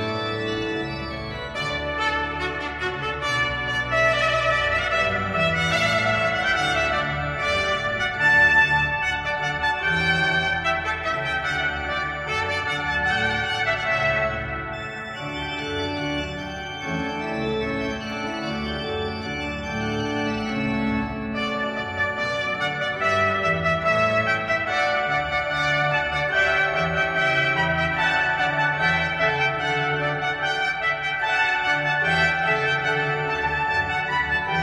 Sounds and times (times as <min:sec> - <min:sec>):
Clarinet: 0:00.0 - 0:34.6.